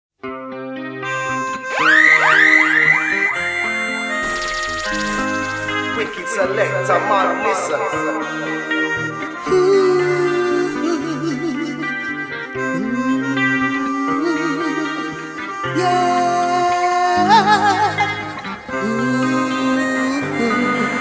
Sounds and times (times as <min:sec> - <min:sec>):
Music: 0:00.2 - 0:21.0
Speech: 0:05.9 - 0:08.3.